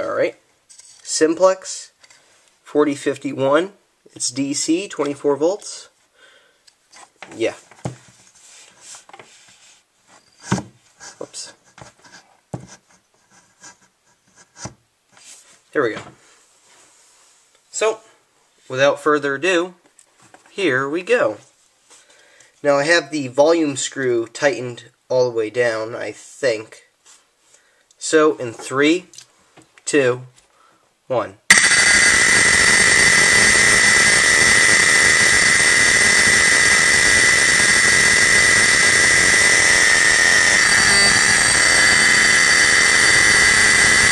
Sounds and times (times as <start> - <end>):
Speech: 0.0 - 0.4, 1.0 - 2.0, 2.6 - 6.0, 7.3 - 7.7, 11.2 - 11.6, 15.7 - 16.2, 17.7 - 19.8, 20.5 - 21.5, 22.6 - 26.9, 28.0 - 29.2, 29.8 - 30.4, 31.1 - 31.4.